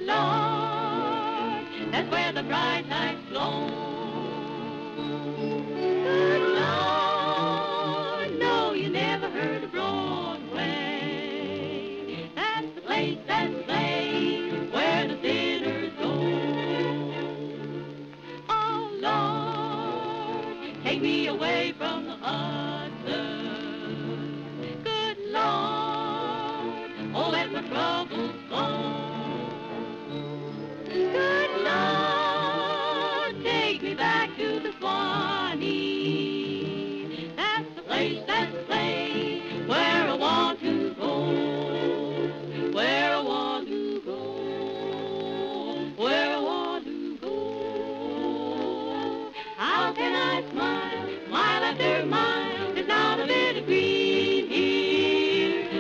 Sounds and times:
Music: 0.0 - 55.8.

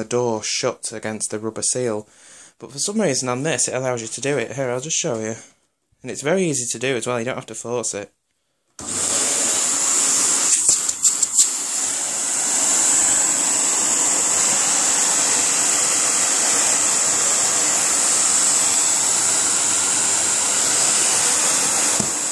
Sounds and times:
Speech: 0.0 - 8.2
Vacuum cleaner: 8.8 - 22.3.

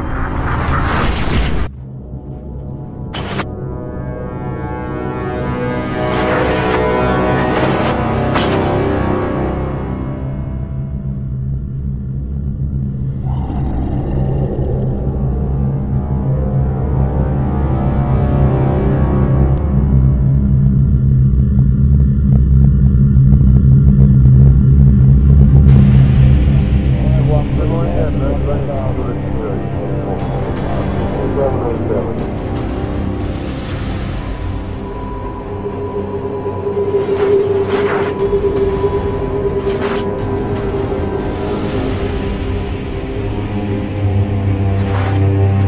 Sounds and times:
Music: 0.0 - 45.6.

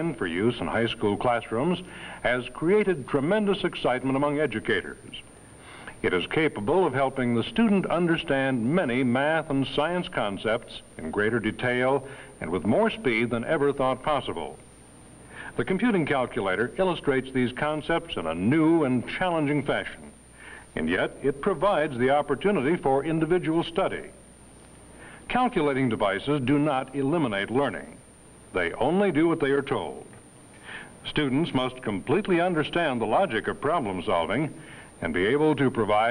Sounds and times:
Speech: 0.0 - 5.3, 5.9 - 14.6, 15.5 - 24.2, 25.3 - 30.2, 31.0 - 36.1.

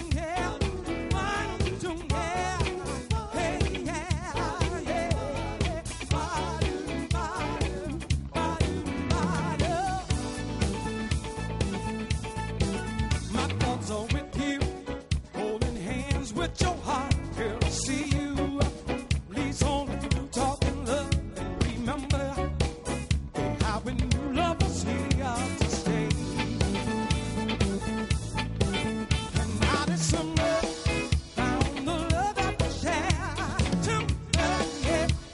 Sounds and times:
Independent music: 0.0 - 35.3.

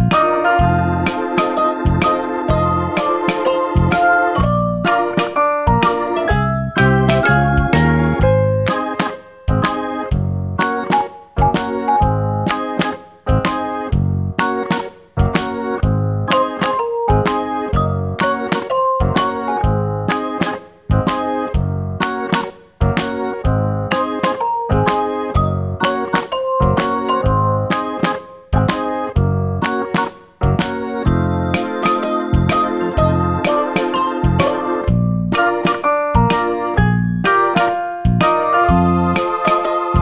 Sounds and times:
Music: 0.0 - 40.0.

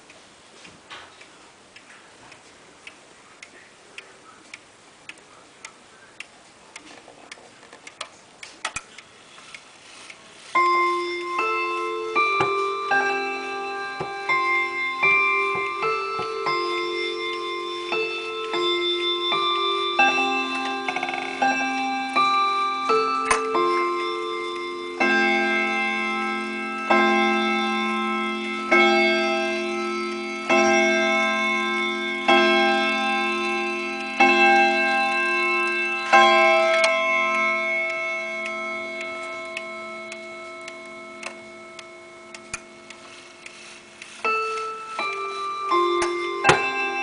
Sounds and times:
Tick-tock: 35.1 - 47.0.

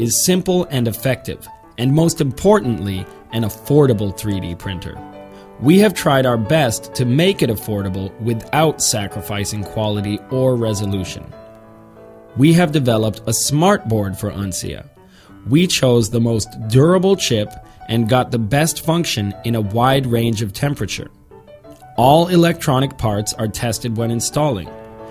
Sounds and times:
Speech: 0.0 - 5.0, 5.6 - 11.4, 12.4 - 14.9, 15.5 - 21.1, 22.0 - 24.7
Music: 0.0 - 25.1.

